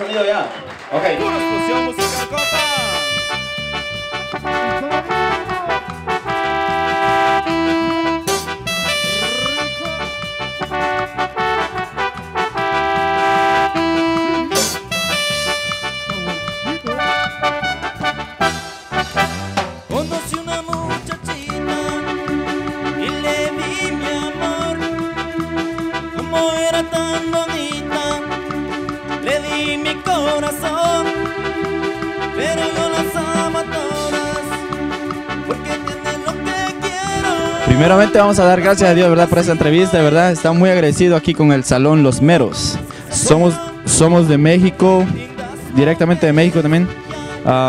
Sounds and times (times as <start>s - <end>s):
Music: 0.7s - 47.6s.